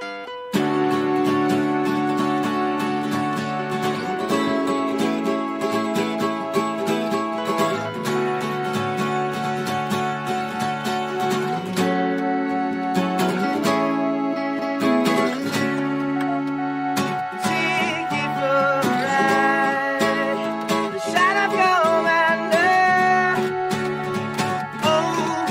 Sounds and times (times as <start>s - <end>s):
Music: 0.0s - 25.5s.